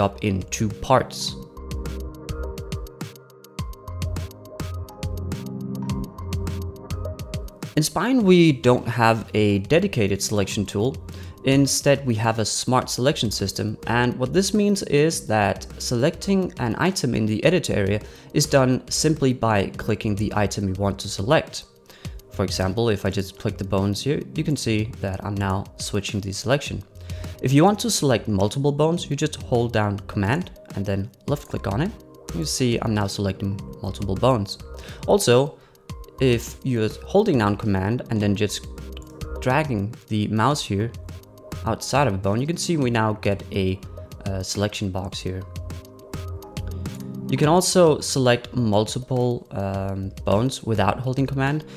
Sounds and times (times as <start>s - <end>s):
Speech: 0.0s - 1.5s, 7.8s - 21.7s, 22.4s - 35.6s, 36.2s - 38.7s, 39.4s - 41.0s, 41.6s - 45.5s, 47.3s - 51.7s
Music: 0.0s - 51.7s.